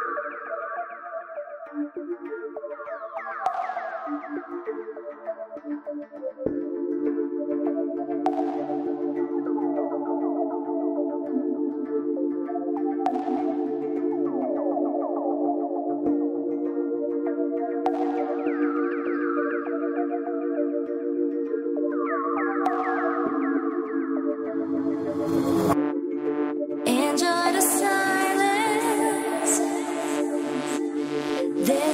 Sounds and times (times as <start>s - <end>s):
Electronica: 0.0s - 31.9s.